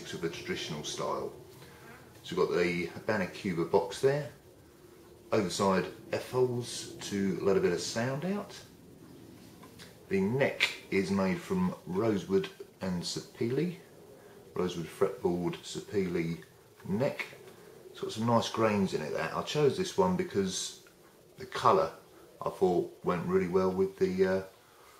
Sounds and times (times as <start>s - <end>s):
Speech: 0.0s - 4.5s, 5.3s - 8.7s, 9.8s - 13.9s, 14.5s - 24.6s.